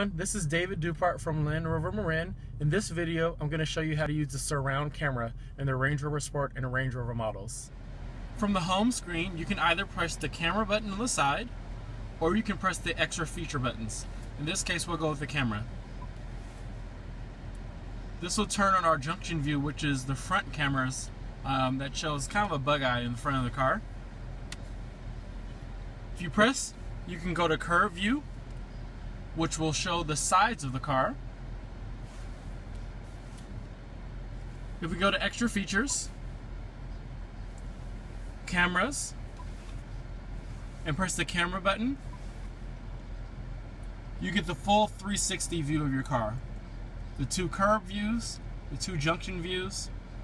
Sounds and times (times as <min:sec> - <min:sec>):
Speech: 0:00.0 - 0:07.7, 0:08.4 - 0:11.6, 0:12.2 - 0:15.7, 0:18.2 - 0:23.8, 0:26.2 - 0:28.3, 0:29.4 - 0:31.2, 0:34.8 - 0:36.1, 0:38.5 - 0:39.2, 0:40.8 - 0:42.0, 0:44.2 - 0:46.4, 0:47.2 - 0:49.9.